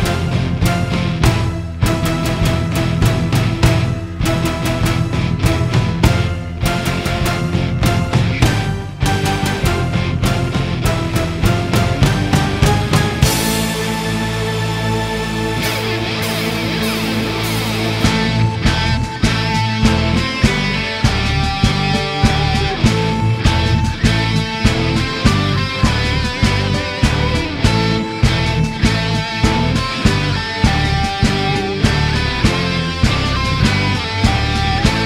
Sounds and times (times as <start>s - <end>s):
Music: 0.0s - 35.0s.